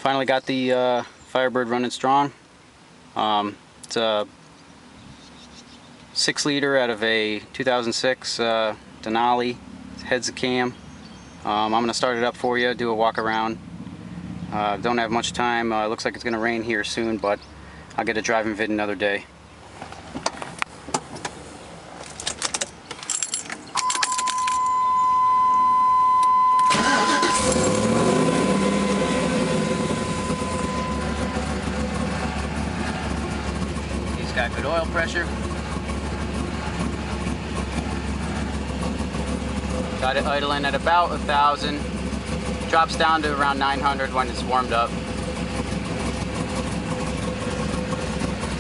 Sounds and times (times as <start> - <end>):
Speech: 0.0 - 2.4, 3.2 - 4.3, 6.2 - 10.8, 11.4 - 13.6, 14.5 - 17.4, 18.0 - 19.3, 34.2 - 35.3, 40.0 - 41.9, 42.7 - 44.9.